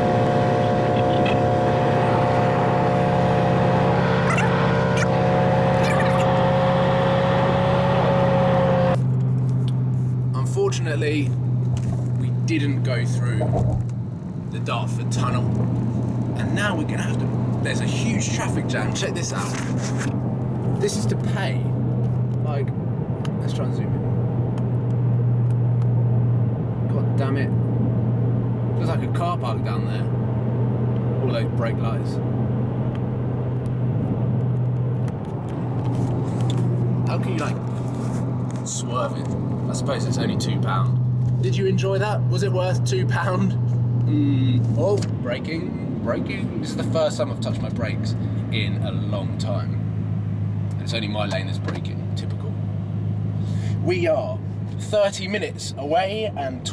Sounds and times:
Car: 0.0s - 56.7s.

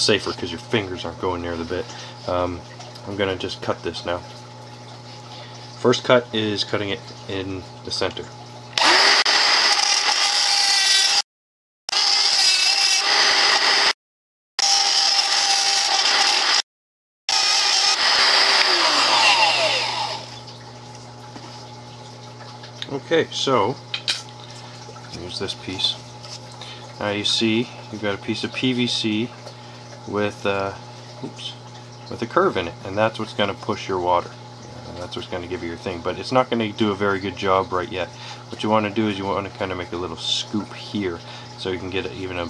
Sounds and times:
Power tool: 8.8s - 11.2s, 11.9s - 14.0s, 14.6s - 16.7s, 17.3s - 20.4s.

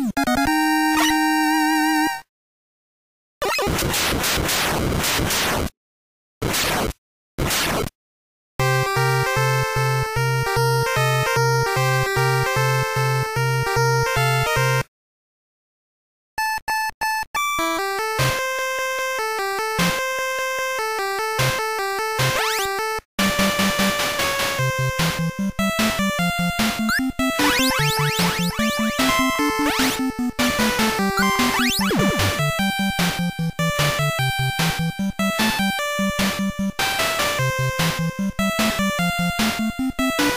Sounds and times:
Music: 0.0s - 2.3s, 8.6s - 14.9s, 16.4s - 40.3s.

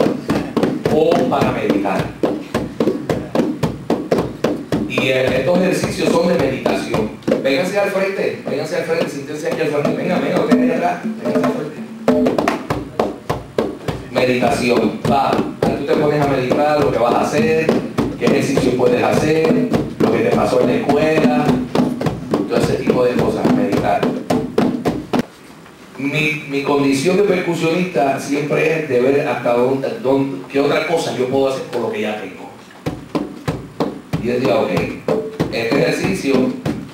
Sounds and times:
Percussion: 0.0s - 25.3s, 32.7s - 36.9s
Speech: 0.3s - 2.1s, 4.9s - 11.8s, 13.9s - 21.6s, 22.5s - 24.2s, 26.0s - 32.6s, 34.2s - 36.6s.

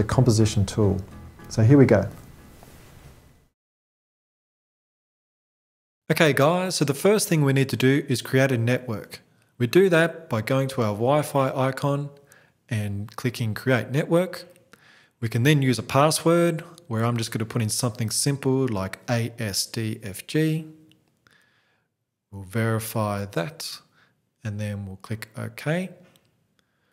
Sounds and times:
Speech: 0.0s - 2.2s, 6.1s - 14.5s, 15.2s - 20.9s, 22.3s - 26.0s.

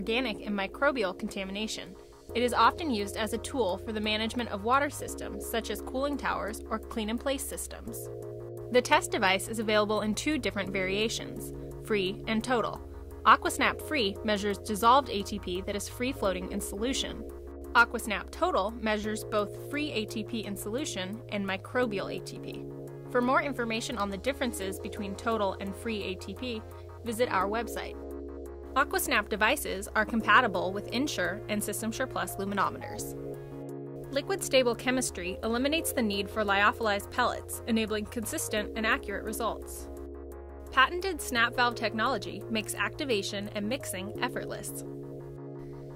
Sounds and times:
Speech: 0.0s - 8.0s, 8.8s - 17.2s, 17.8s - 22.6s, 23.2s - 28.0s, 28.8s - 33.1s, 34.2s - 39.9s, 40.8s - 44.8s
Music: 0.0s - 45.9s.

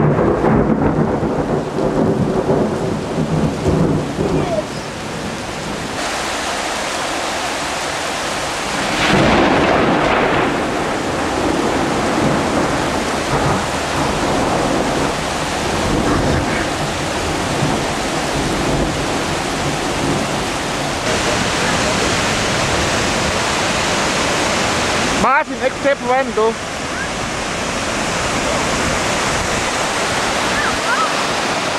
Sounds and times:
Waterfall: 0.0s - 31.7s
Speech: 4.3s - 4.9s, 25.2s - 27.1s.

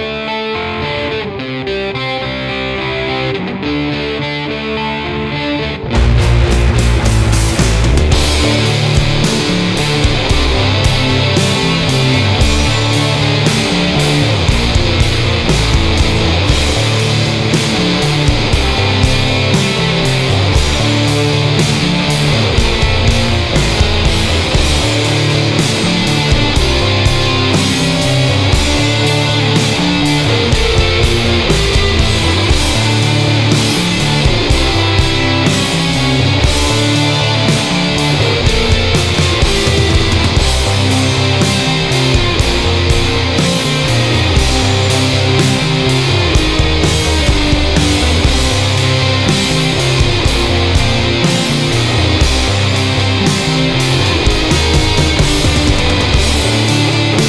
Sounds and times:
Music: 0.0s - 57.2s.

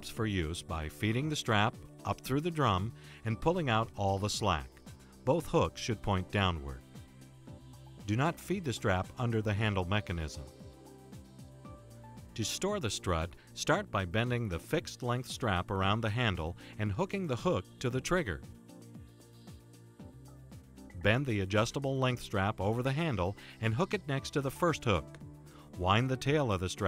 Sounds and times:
Speech: 0.0s - 4.7s, 5.3s - 6.8s, 8.1s - 10.5s, 12.4s - 18.4s, 21.0s - 25.1s, 25.8s - 26.8s
Music: 0.0s - 26.8s.

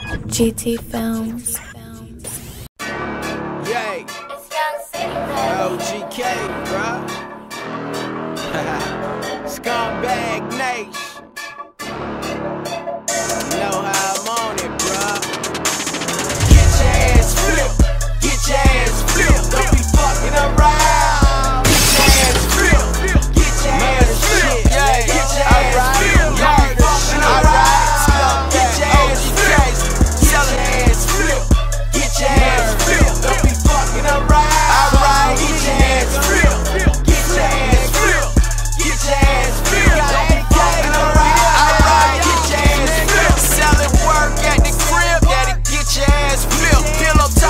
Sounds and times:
Music: 0.0s - 47.4s.

